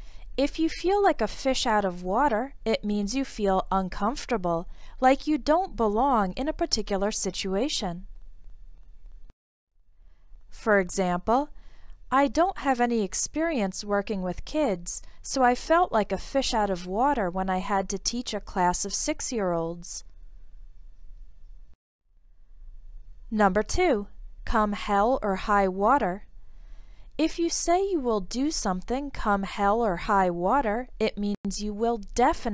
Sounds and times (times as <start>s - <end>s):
Speech: 0.4s - 8.1s, 10.6s - 11.5s, 12.1s - 20.0s, 23.3s - 26.2s, 27.2s - 32.5s.